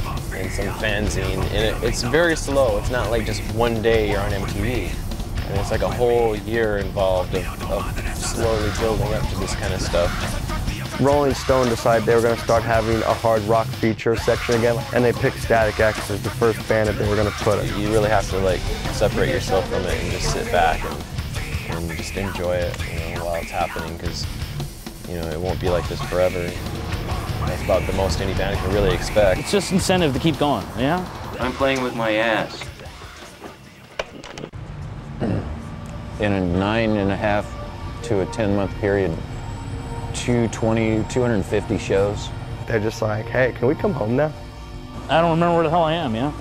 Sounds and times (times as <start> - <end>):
Speech: 0.0 - 10.3, 11.0 - 21.0, 21.7 - 24.3, 25.1 - 26.6, 27.4 - 33.0, 36.2 - 37.4, 40.2 - 44.4, 45.1 - 46.4
Music: 0.0 - 46.4.